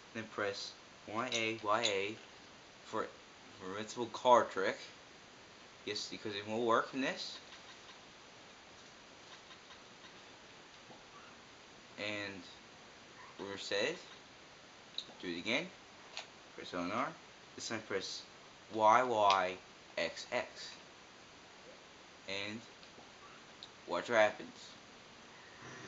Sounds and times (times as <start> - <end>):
Speech: 0.2 - 2.2, 2.9 - 5.0, 5.9 - 7.4, 12.0 - 12.6, 13.4 - 14.1, 15.2 - 15.8, 16.6 - 20.8, 22.3 - 22.7, 23.9 - 24.8.